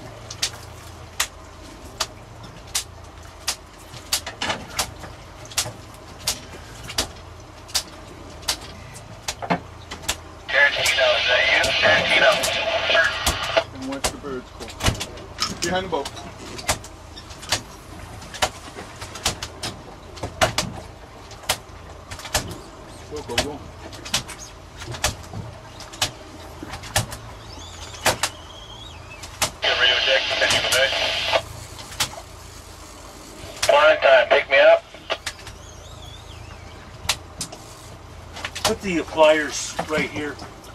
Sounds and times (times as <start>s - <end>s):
Boat, Water vehicle: 0.0s - 40.7s
Speech: 10.5s - 14.5s, 23.1s - 23.6s, 29.6s - 31.4s, 33.7s - 34.9s, 38.7s - 40.4s.